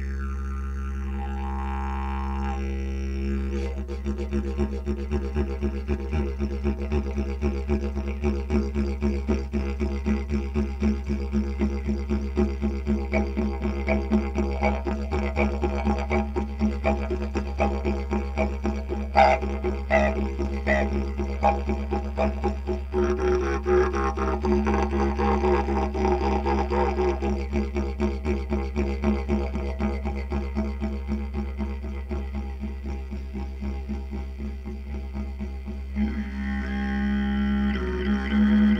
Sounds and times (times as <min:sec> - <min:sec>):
Didgeridoo: 0:00.0 - 0:38.7.